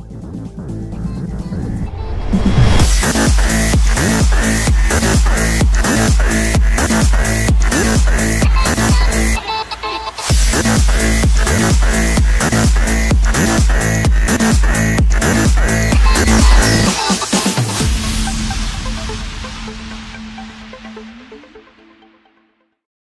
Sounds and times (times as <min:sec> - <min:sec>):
Dance music: 0:00.0 - 0:22.6.